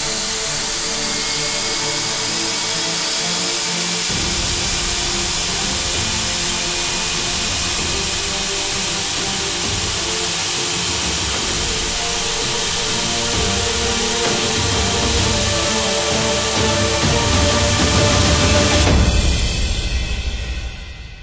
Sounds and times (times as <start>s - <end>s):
Aircraft engine: 0.0s - 19.5s.